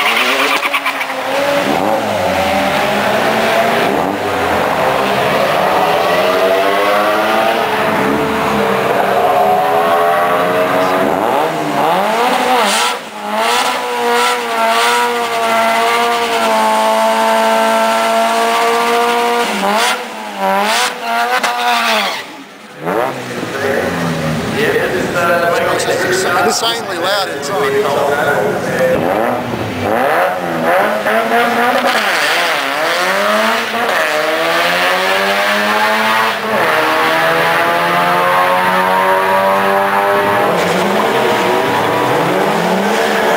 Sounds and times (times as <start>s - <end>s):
Car: 0.0s - 43.3s
Speech: 23.5s - 29.2s.